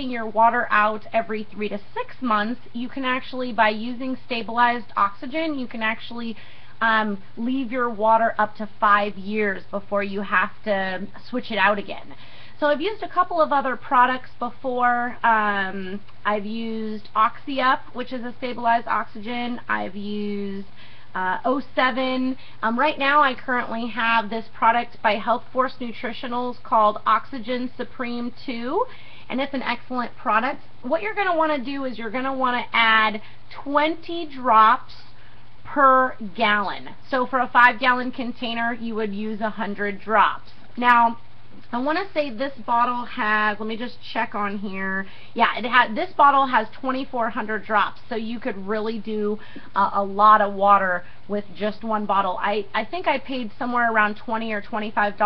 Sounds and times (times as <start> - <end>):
Speech: 0.0 - 55.2.